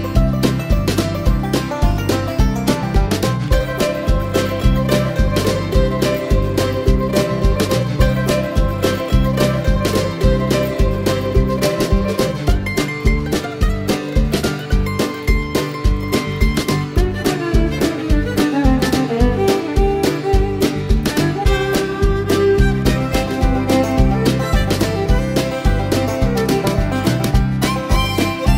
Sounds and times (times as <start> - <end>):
Music: 0.0 - 28.5.